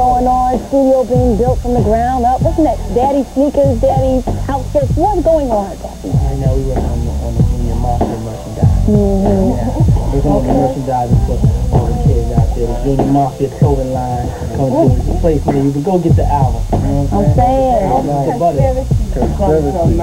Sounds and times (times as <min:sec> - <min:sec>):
Music: 0:00.0 - 0:20.0
Speech: 0:00.0 - 0:20.0.